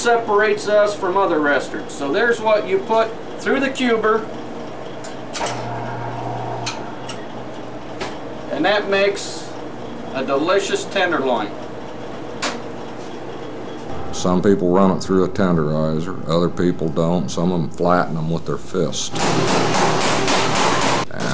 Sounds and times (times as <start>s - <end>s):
Speech: 0.0s - 4.3s, 8.5s - 11.6s, 14.2s - 19.2s, 21.1s - 21.3s.